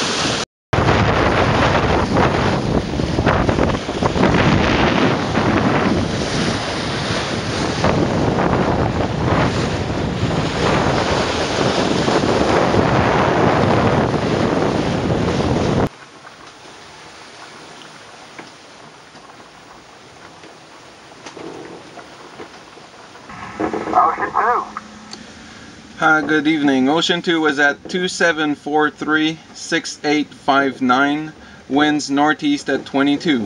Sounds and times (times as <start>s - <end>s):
Boat, Water vehicle: 0.0s - 33.4s
Speech: 23.7s - 24.8s, 26.0s - 33.4s.